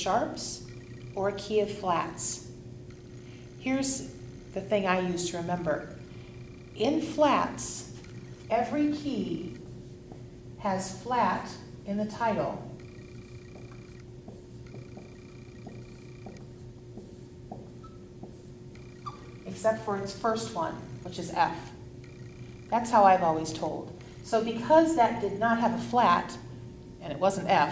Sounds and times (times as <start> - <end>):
Speech: 0.0 - 0.6, 1.2 - 2.5, 8.5 - 9.6, 10.6 - 12.7, 19.5 - 21.8, 22.8 - 26.4, 27.0 - 27.7.